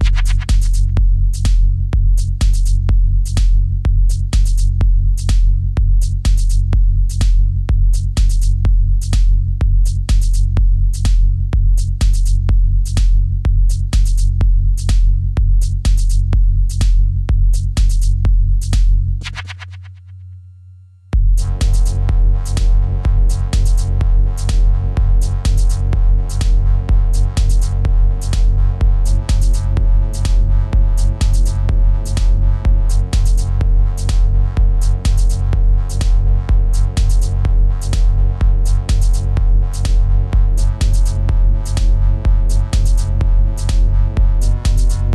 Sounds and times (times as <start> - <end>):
Techno: 0.0 - 20.0, 21.2 - 45.1.